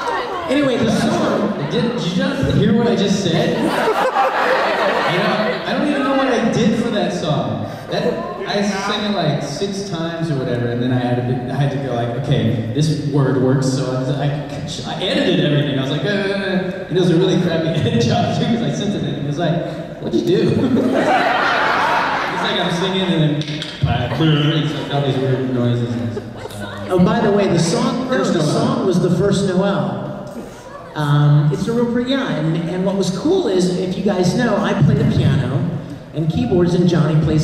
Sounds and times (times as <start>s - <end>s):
Speech: 0.4s - 3.6s, 5.1s - 20.7s, 22.4s - 30.0s, 31.0s - 37.4s.